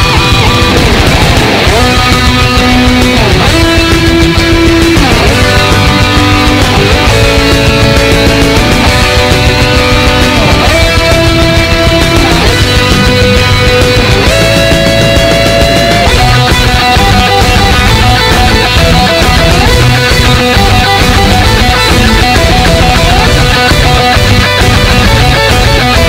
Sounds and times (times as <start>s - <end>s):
Heavy metal: 0.0s - 26.0s.